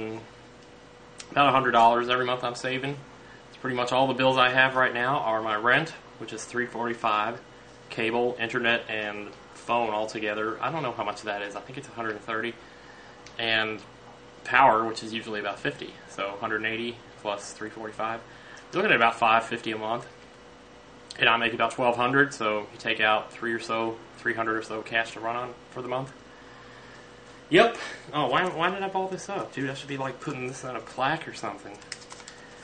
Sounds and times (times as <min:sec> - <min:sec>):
Speech: 0:00.0 - 0:00.3, 0:01.2 - 0:12.6, 0:13.4 - 0:20.1, 0:21.1 - 0:26.2, 0:27.5 - 0:31.8.